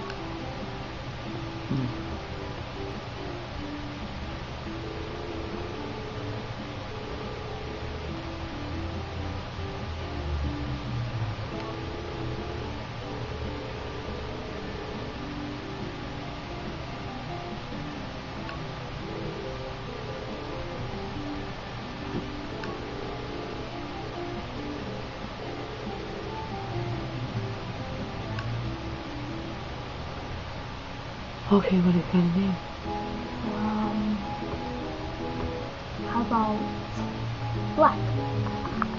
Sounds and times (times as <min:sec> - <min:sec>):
Music: 0:00.0 - 0:38.9.